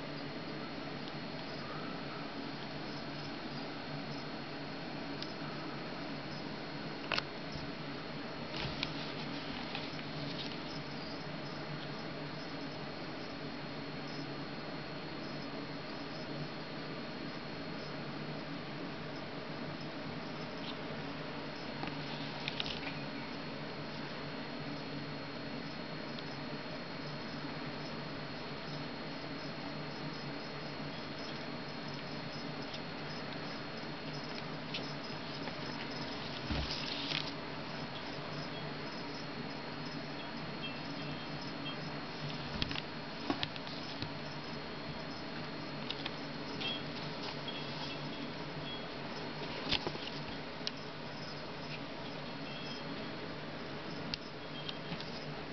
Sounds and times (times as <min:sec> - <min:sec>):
Inside, small room: 0:00.0 - 0:55.5.